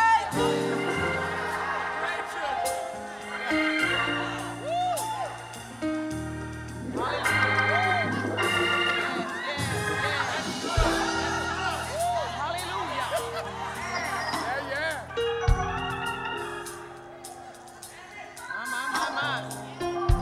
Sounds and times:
Music: 0:00.0 - 0:20.2.

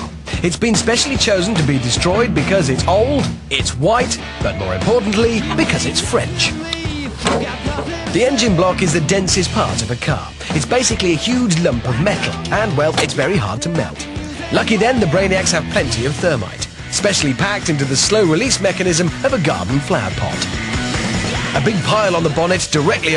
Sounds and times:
Speech: 0:00.0 - 0:06.6, 0:08.1 - 0:20.5, 0:21.6 - 0:23.1
Music: 0:00.0 - 0:23.1.

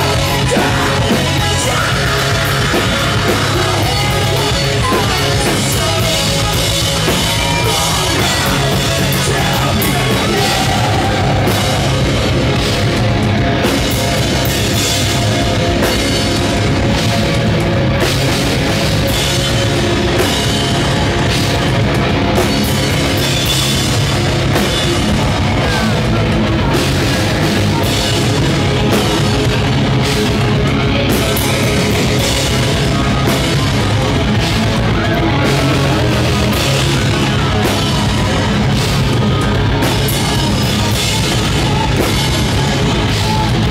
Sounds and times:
Punk rock: 0:00.0 - 0:43.7.

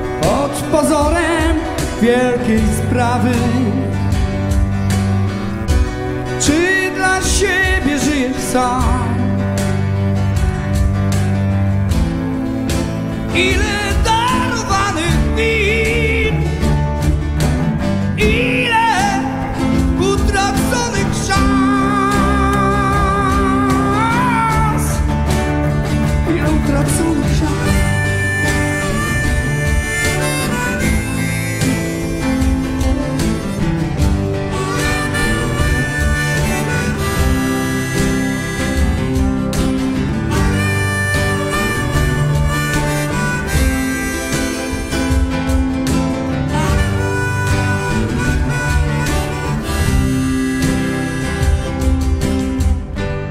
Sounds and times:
Double bass: 0:00.0 - 0:53.3.

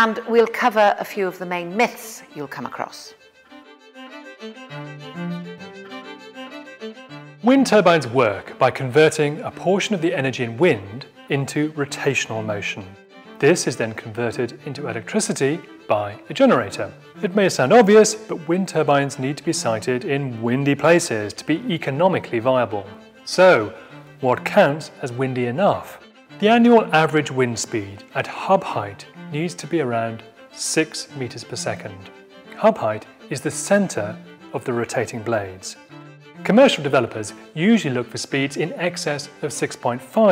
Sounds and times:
Speech: 0:00.0 - 0:03.2, 0:07.4 - 0:35.8, 0:36.4 - 0:40.3
Music: 0:00.0 - 0:40.3.

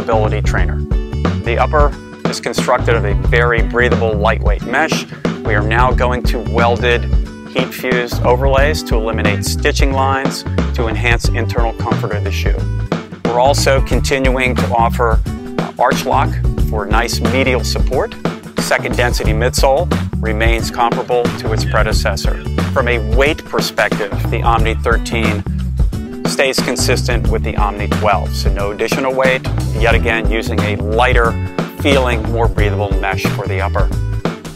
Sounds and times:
Speech: 0:00.0 - 0:00.8, 0:01.5 - 0:12.6, 0:13.2 - 0:25.4, 0:26.3 - 0:34.0
Music: 0:00.0 - 0:34.5.

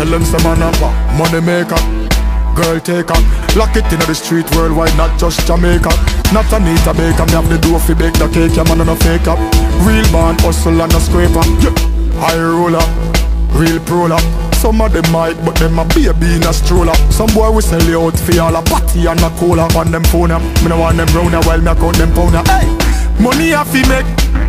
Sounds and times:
Music: 0:00.0 - 0:24.4.

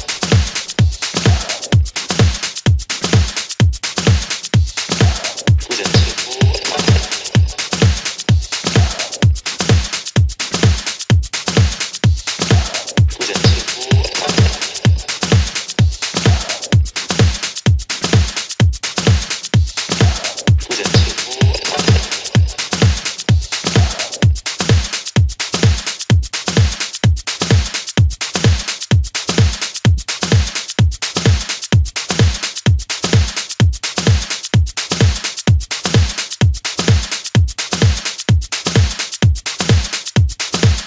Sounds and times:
Dance music: 0:00.0 - 0:28.8
House music: 0:00.0 - 0:40.8.

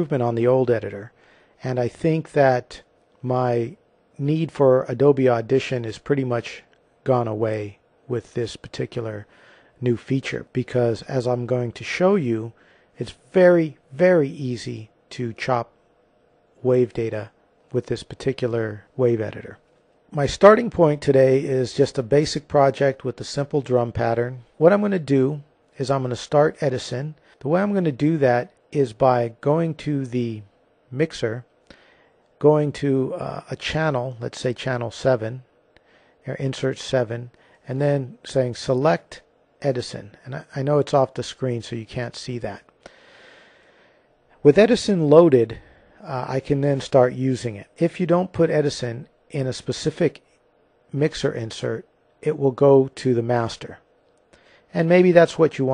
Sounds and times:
Speech: 0:00.0 - 0:15.8, 0:16.6 - 0:31.6, 0:32.4 - 0:35.5, 0:36.2 - 0:42.7, 0:44.4 - 0:50.3, 0:50.9 - 0:53.9, 0:54.7 - 0:55.7.

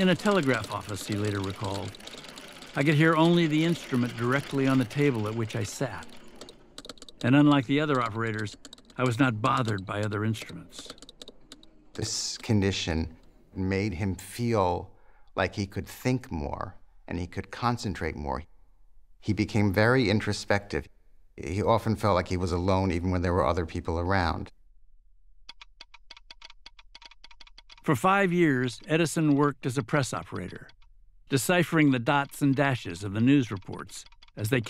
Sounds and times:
Computer keyboard: 0:00.0 - 0:12.8, 0:25.5 - 0:27.9, 0:28.8 - 0:34.6.

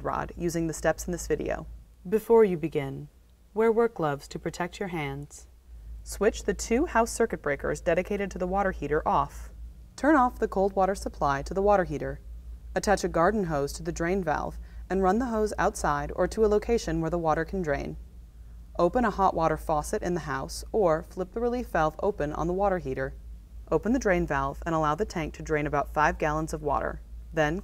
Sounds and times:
Speech: 0:00.0 - 0:05.5, 0:06.1 - 0:12.2, 0:12.8 - 0:18.0, 0:18.8 - 0:27.6.

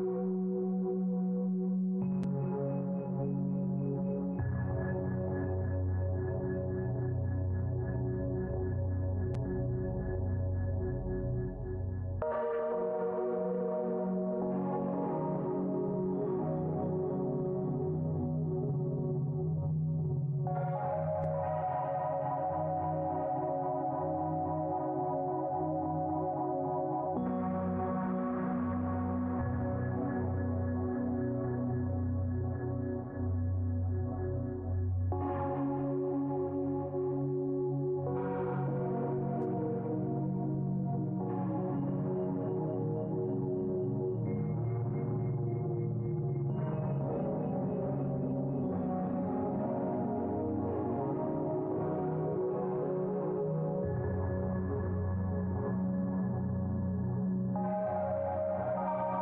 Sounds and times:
Music: 0:00.0 - 0:59.2.

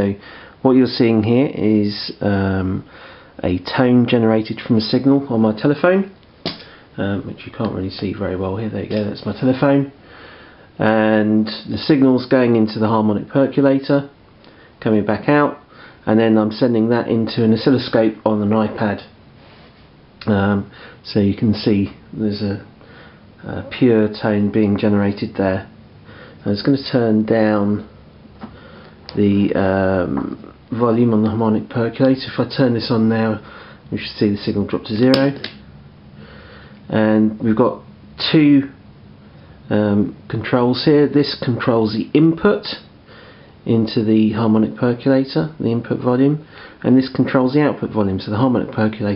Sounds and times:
Speech: 0:00.0 - 0:06.2, 0:07.0 - 0:10.0, 0:10.8 - 0:14.2, 0:14.8 - 0:19.2, 0:20.2 - 0:22.7, 0:23.4 - 0:25.7, 0:26.4 - 0:27.9, 0:29.1 - 0:35.5, 0:36.9 - 0:38.8, 0:39.7 - 0:42.9, 0:43.6 - 0:49.1.

